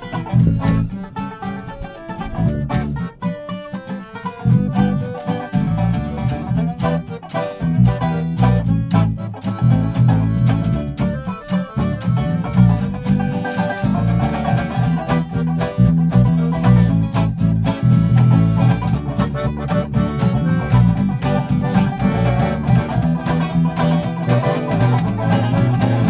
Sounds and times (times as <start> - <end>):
Banjo: 0.0 - 26.0
Bluegrass: 0.0 - 26.0.